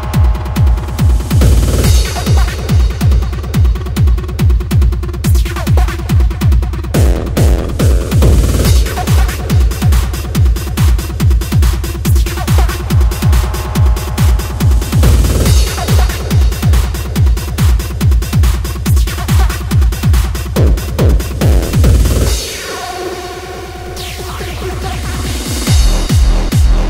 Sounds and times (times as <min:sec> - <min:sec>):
Dubstep: 0:00.0 - 0:26.9.